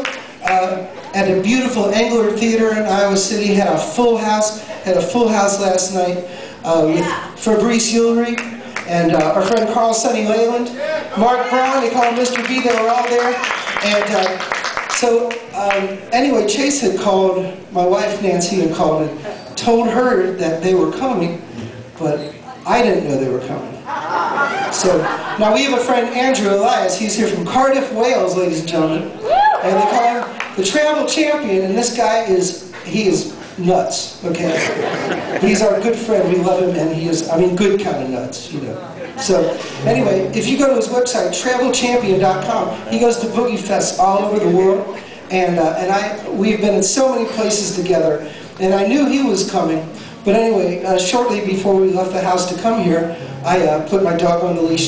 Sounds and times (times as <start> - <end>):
Speech: 0.0 - 23.8, 24.7 - 54.8.